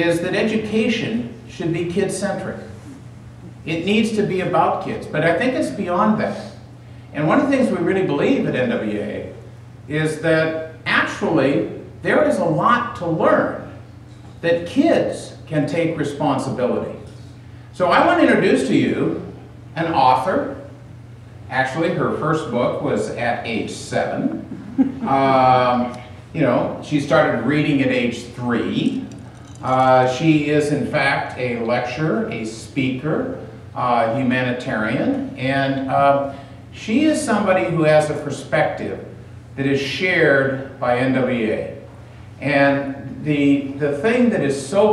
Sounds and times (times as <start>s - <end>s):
Male speech, man speaking: 0.0s - 2.7s, 3.7s - 6.6s, 7.2s - 13.7s, 14.4s - 17.1s, 17.8s - 20.7s, 21.5s - 24.3s, 25.1s - 41.8s, 42.4s - 44.9s
Narration, monologue: 0.0s - 44.9s.